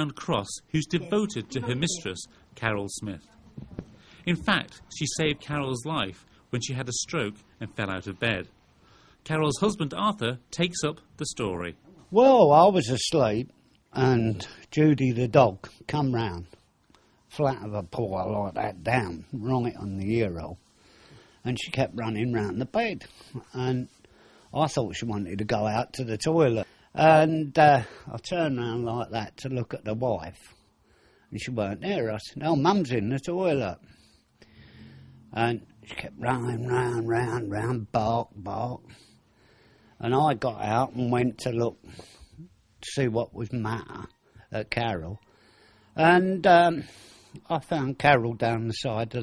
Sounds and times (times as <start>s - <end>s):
Speech: 0.0s - 3.6s, 4.2s - 8.5s, 9.2s - 16.6s, 17.3s - 20.6s, 21.4s - 23.9s, 24.5s - 30.6s, 31.4s - 33.8s, 35.4s - 39.0s, 40.0s - 41.8s, 42.4s - 45.2s, 46.0s - 49.2s.